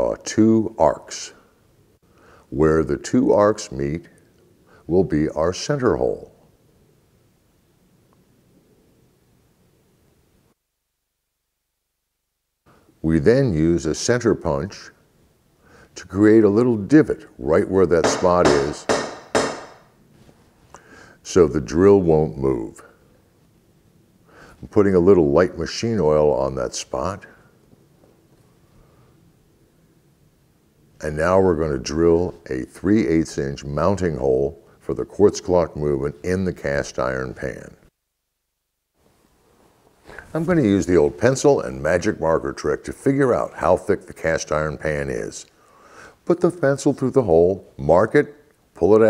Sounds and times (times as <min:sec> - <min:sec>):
Speech: 0:00.0 - 0:01.5, 0:02.5 - 0:04.2, 0:04.9 - 0:06.4, 0:13.0 - 0:15.0, 0:16.0 - 0:18.9, 0:21.2 - 0:23.0, 0:24.6 - 0:27.5, 0:31.0 - 0:37.9, 0:40.2 - 0:45.5, 0:46.2 - 0:49.1.